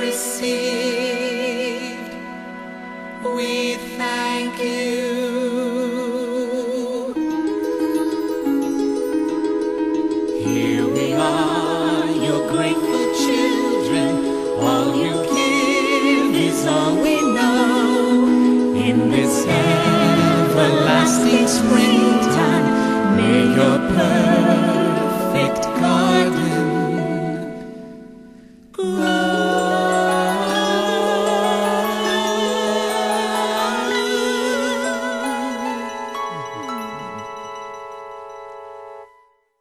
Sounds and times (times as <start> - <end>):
Music: 0.0 - 39.6.